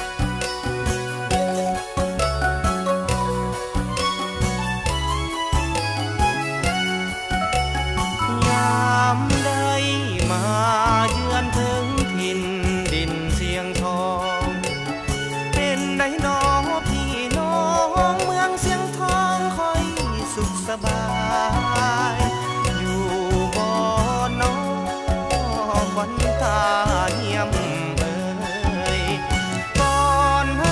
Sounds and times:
Music: 0.0s - 30.7s.

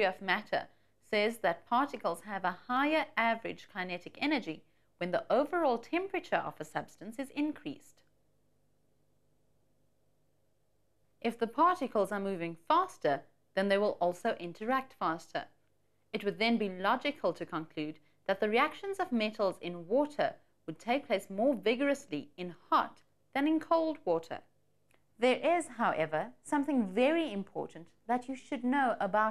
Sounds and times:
Speech: 0.0s - 8.0s, 11.2s - 15.5s, 16.2s - 24.5s, 25.2s - 29.3s.

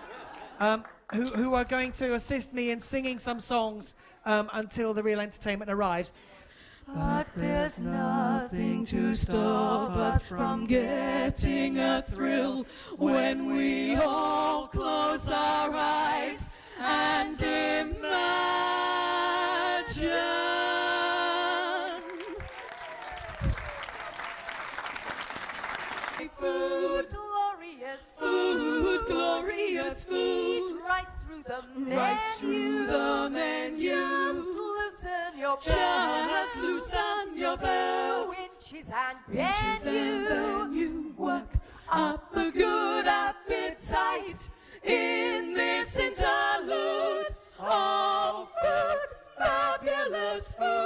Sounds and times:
Choir: 6.8s - 23.0s, 25.9s - 50.8s
Female singing: 6.9s - 22.2s, 26.2s - 50.8s.

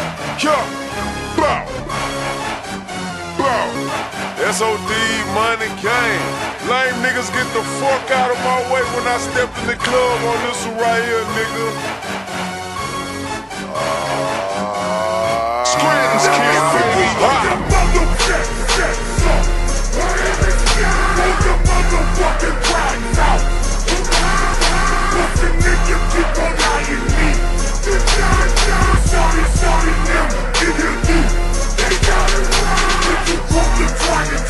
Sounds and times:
Music: 0.0s - 34.4s.

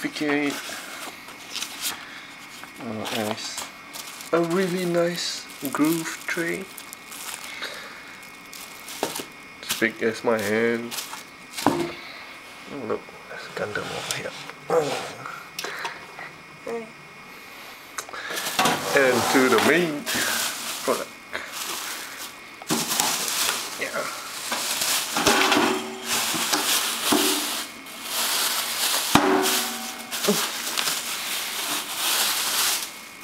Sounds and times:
Speech: 0.0s - 0.6s, 2.8s - 3.7s, 4.3s - 6.7s, 9.6s - 11.0s, 12.7s - 15.1s, 18.8s - 20.2s, 20.8s - 21.1s, 23.8s - 24.2s.

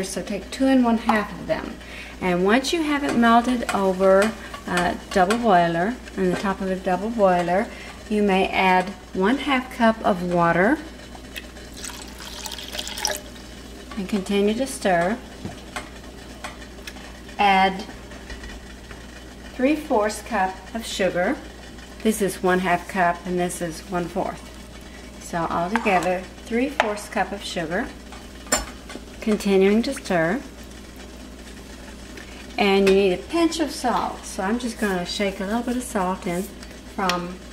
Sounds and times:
Speech: 0.0s - 10.9s, 14.0s - 15.2s, 17.4s - 17.9s, 19.6s - 21.4s, 22.0s - 24.4s, 25.2s - 28.0s, 29.2s - 30.5s, 32.6s - 37.4s.

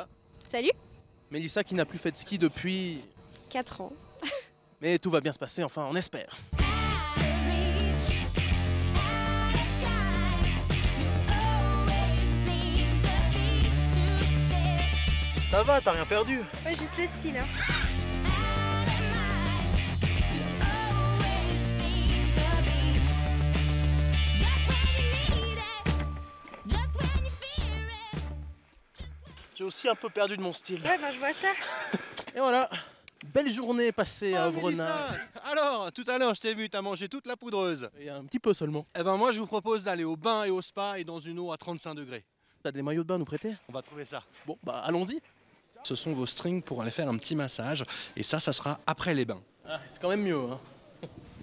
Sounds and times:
Music: 6.5s - 29.6s.

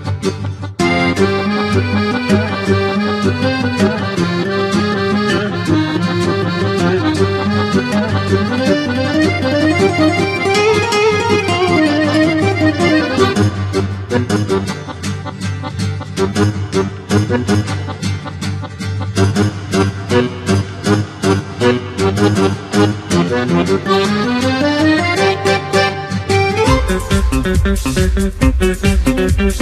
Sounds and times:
Music: 0.0s - 29.6s.

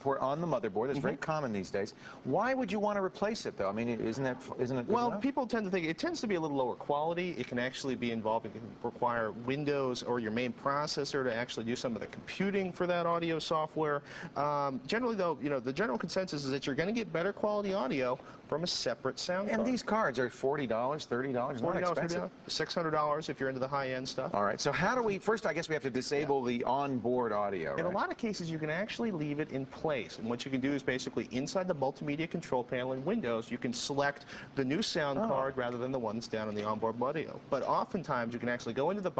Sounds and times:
Speech: 0.0s - 39.1s.

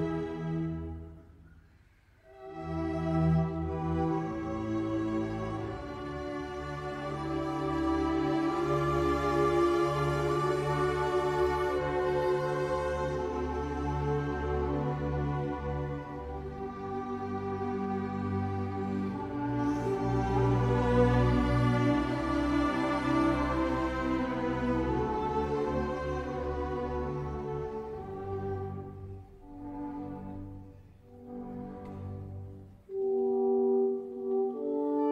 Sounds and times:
Violin, fiddle: 0.0s - 1.1s, 2.4s - 33.0s.

